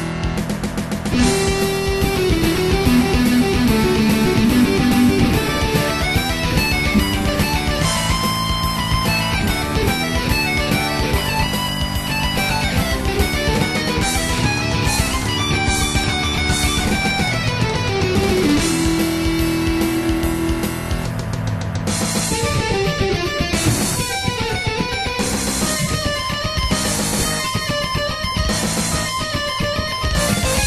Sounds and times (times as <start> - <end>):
Electric guitar: 0.0 - 30.6
Strum: 0.1 - 30.6.